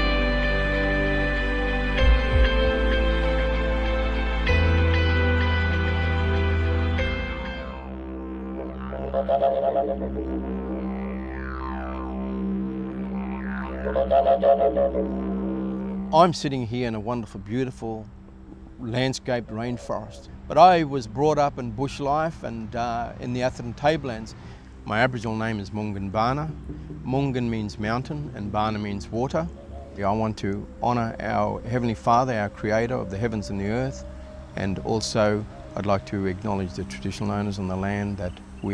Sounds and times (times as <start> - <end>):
Didgeridoo: 0.0 - 38.7.